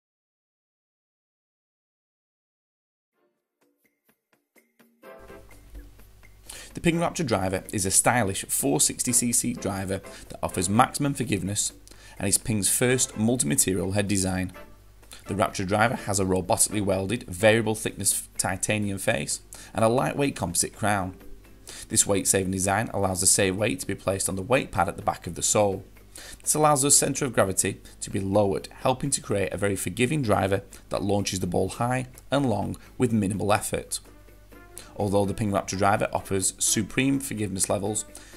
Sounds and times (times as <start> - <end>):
Music: 3.1 - 38.3
Speech: 6.8 - 14.6, 15.3 - 21.2, 21.9 - 25.9, 26.5 - 34.0, 35.0 - 38.1.